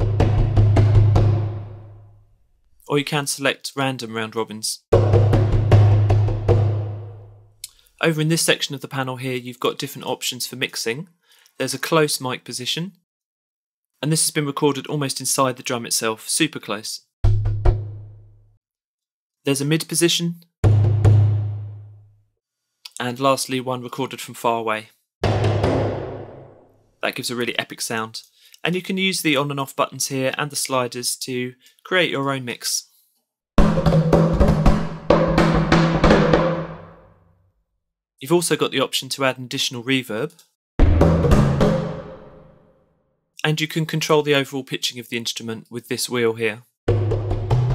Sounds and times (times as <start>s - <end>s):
Speech: 2.8s - 4.8s, 8.0s - 13.0s, 14.0s - 17.1s, 19.5s - 20.5s, 22.9s - 25.0s, 27.0s - 32.9s, 38.2s - 40.5s, 43.4s - 46.7s.